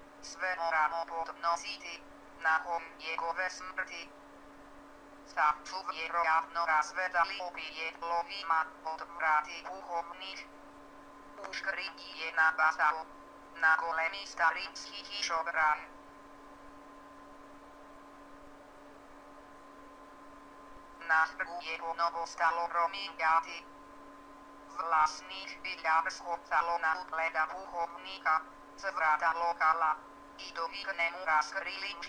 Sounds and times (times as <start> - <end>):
Female speech, woman speaking: 0.3 - 4.1, 5.3 - 10.5, 11.4 - 15.9, 21.0 - 23.7, 24.8 - 32.0.